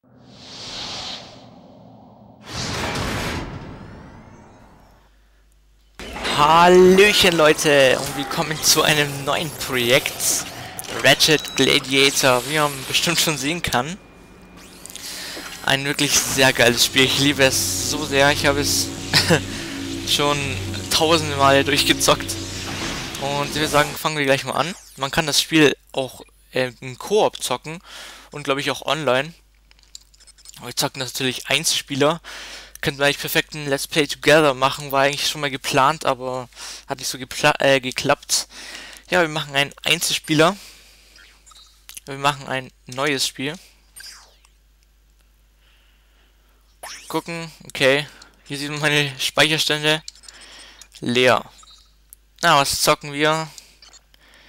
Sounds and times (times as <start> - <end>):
Speech: 6.2 - 14.0, 15.6 - 19.5, 20.1 - 22.4, 23.2 - 27.8, 28.4 - 29.4, 30.6 - 32.2, 32.8 - 38.5, 39.1 - 40.6, 42.0 - 43.6, 47.1 - 50.1, 51.0 - 51.5, 52.4 - 53.6.